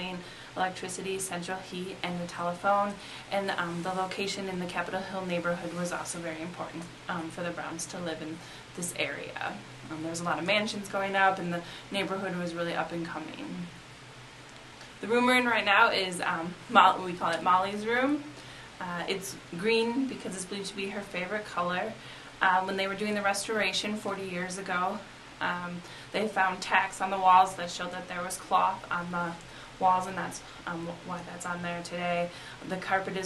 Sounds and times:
Speech: 0.0s - 13.7s, 15.0s - 33.2s.

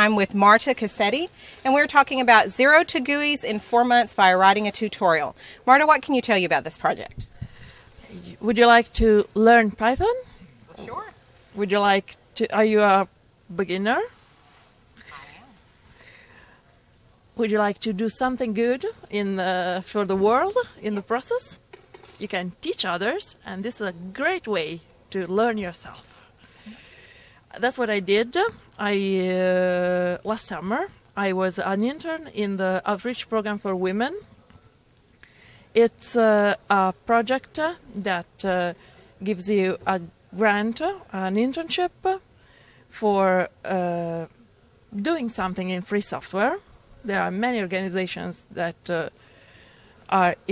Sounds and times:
Speech: 0.0s - 7.2s, 8.0s - 14.1s, 17.4s - 21.6s, 22.2s - 26.1s, 27.5s - 34.6s, 35.8s - 42.2s, 43.0s - 44.3s, 45.0s - 49.1s, 50.1s - 50.5s.

